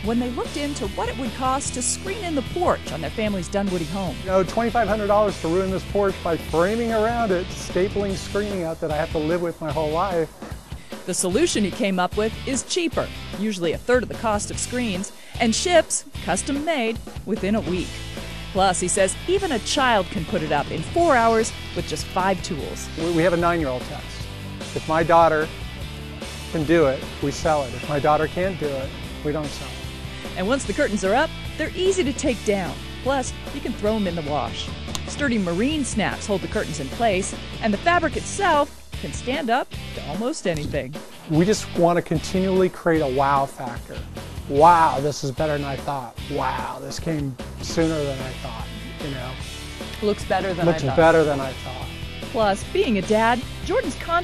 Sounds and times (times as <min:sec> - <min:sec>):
Music: 0:00.0 - 0:54.2.